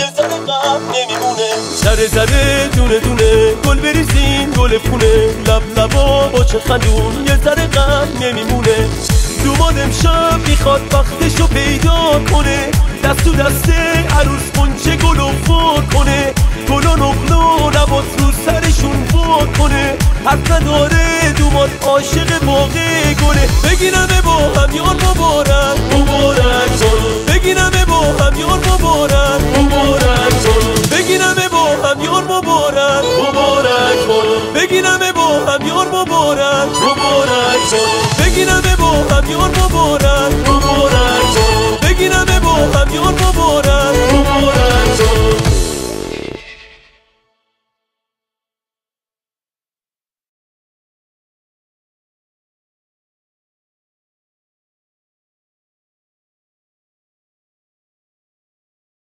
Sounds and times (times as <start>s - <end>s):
Music: 0.0s - 48.5s.